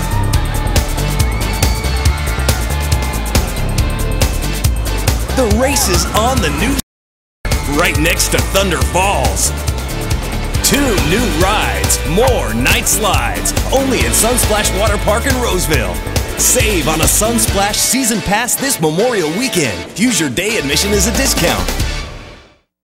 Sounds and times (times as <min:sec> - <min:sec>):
Music: 0:00.0 - 0:06.8, 0:07.4 - 0:22.7
Speech: 0:05.3 - 0:06.8, 0:07.7 - 0:09.5, 0:10.6 - 0:21.7.